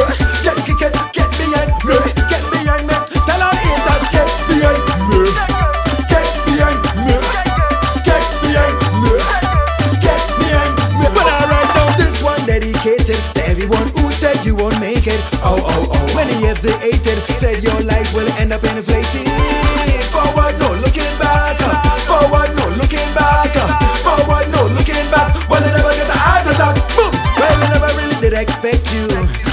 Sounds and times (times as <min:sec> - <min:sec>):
Dance music: 0:00.0 - 0:29.5.